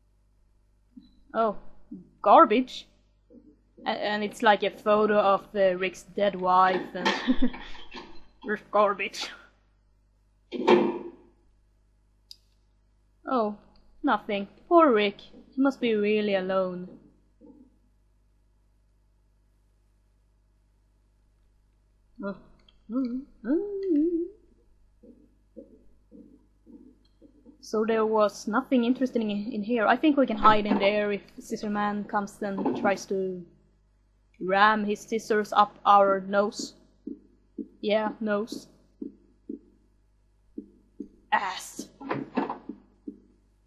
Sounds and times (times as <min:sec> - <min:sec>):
Speech: 0:01.4 - 0:02.8, 0:03.8 - 0:07.4, 0:08.5 - 0:09.4, 0:13.3 - 0:17.0, 0:22.2 - 0:24.3, 0:27.6 - 0:33.5, 0:34.4 - 0:36.7, 0:37.8 - 0:38.6, 0:41.4 - 0:42.5.